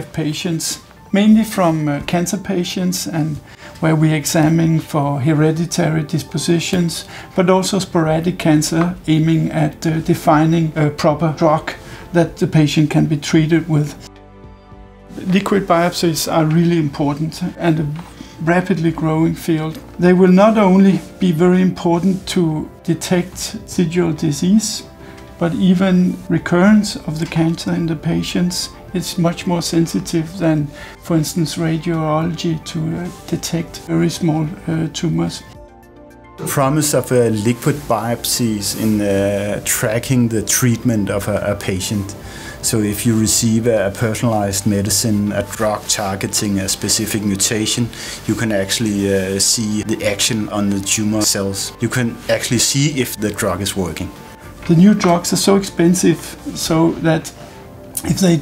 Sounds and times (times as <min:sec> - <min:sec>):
Speech: 0:00.0 - 0:14.1, 0:15.1 - 0:35.6, 0:36.4 - 0:57.4, 0:58.0 - 0:58.4
Music: 0:00.0 - 0:58.4.